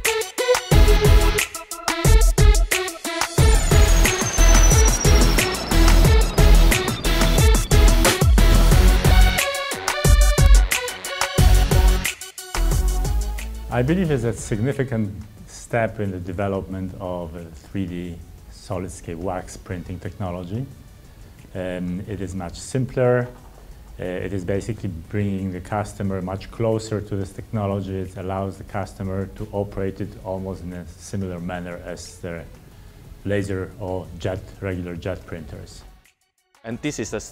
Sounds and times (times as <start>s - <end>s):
Music: 0.0s - 37.3s
Speech: 13.7s - 20.7s, 21.5s - 23.4s, 24.0s - 32.6s, 33.2s - 35.9s, 36.6s - 37.3s.